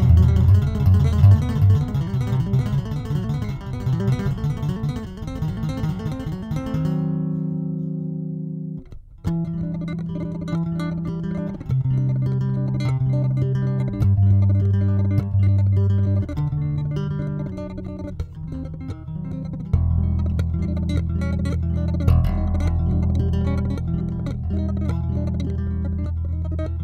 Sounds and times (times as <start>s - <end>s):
Music: 0.0s - 26.8s.